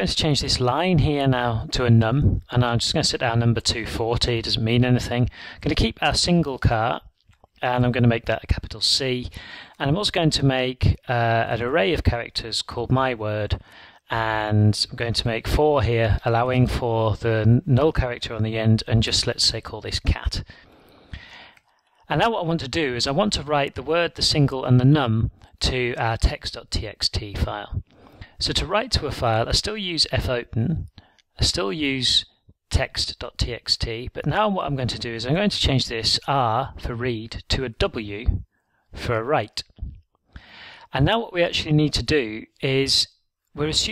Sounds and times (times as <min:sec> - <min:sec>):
Speech: 0:00.0 - 0:20.5, 0:22.0 - 0:40.0, 0:40.9 - 0:43.9.